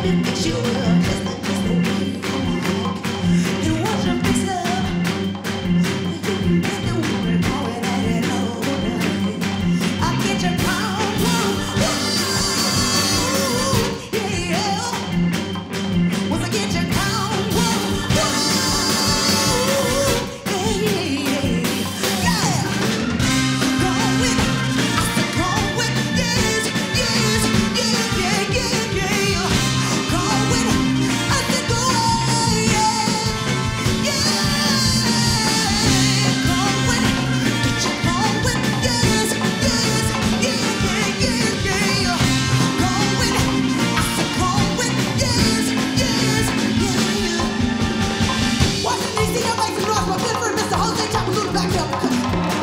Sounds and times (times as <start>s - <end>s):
Rock and roll: 0.0s - 52.6s
Singing: 5.8s - 15.2s, 16.3s - 47.8s.